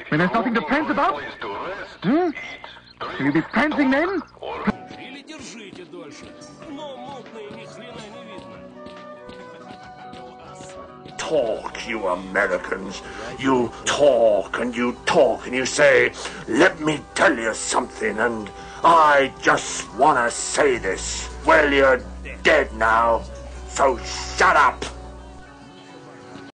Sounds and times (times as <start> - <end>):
Music: 0.0 - 26.5
Speech: 3.6 - 8.6, 10.2 - 25.0.